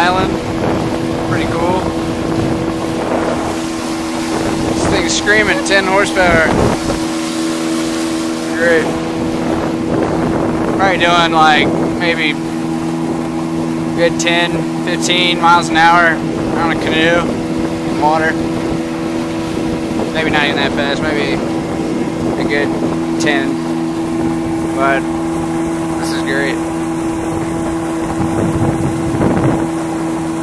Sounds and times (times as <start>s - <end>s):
Boat, Water vehicle: 0.0s - 30.4s
Speech: 1.3s - 1.9s, 4.8s - 6.6s, 8.5s - 8.9s, 10.8s - 12.4s, 14.0s - 17.3s, 17.9s - 18.4s, 20.1s - 21.4s, 22.3s - 23.6s, 24.7s - 25.0s, 26.0s - 26.6s.